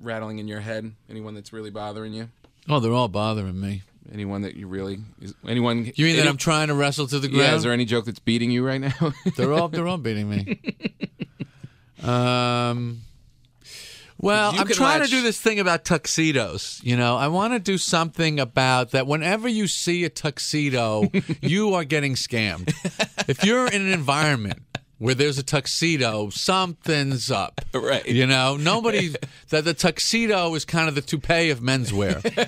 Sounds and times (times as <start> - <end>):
Speech: 0.0 - 10.7, 12.0 - 13.0, 14.2 - 32.4.